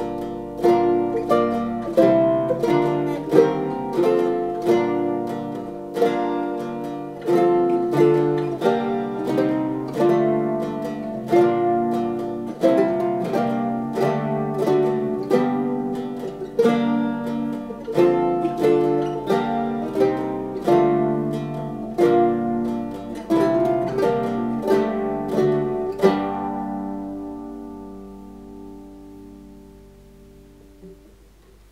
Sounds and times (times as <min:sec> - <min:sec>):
Mandolin: 0:00.0 - 0:31.7.